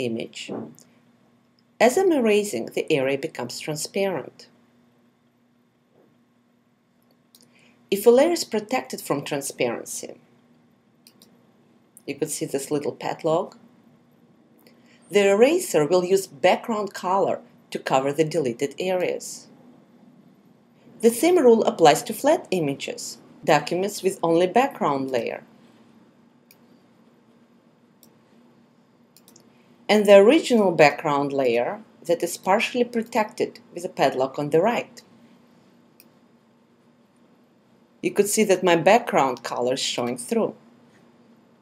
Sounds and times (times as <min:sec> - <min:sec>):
Speech: 0:00.0 - 0:00.8, 0:01.8 - 0:04.5, 0:07.9 - 0:10.2, 0:12.0 - 0:13.6, 0:15.1 - 0:19.5, 0:21.0 - 0:25.5, 0:29.9 - 0:35.0, 0:38.0 - 0:40.6.